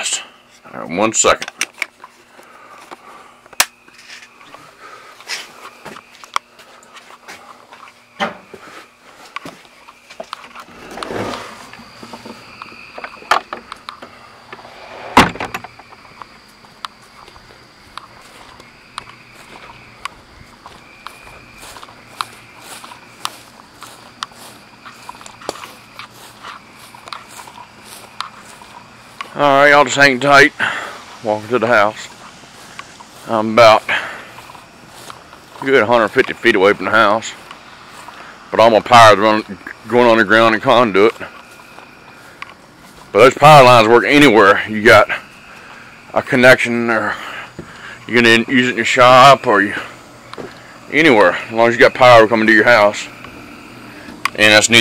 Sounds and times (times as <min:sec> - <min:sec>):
Door: 0:15.0 - 0:15.7.